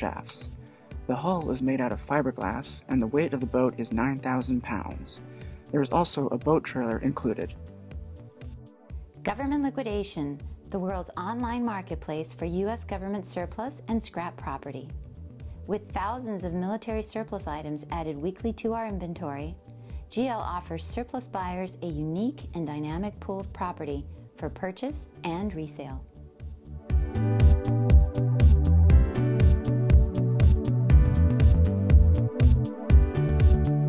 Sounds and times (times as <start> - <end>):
Speech: 0.0 - 0.5, 1.1 - 7.6, 9.2 - 14.9, 15.7 - 26.0
Music: 0.0 - 33.8.